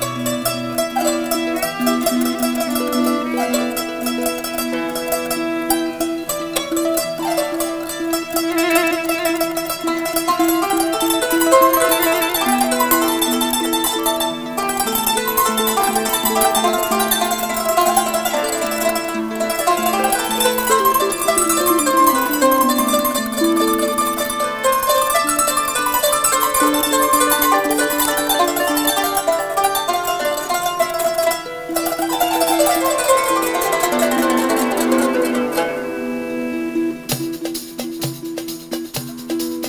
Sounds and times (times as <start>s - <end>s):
Violin, fiddle: 0.0s - 37.4s.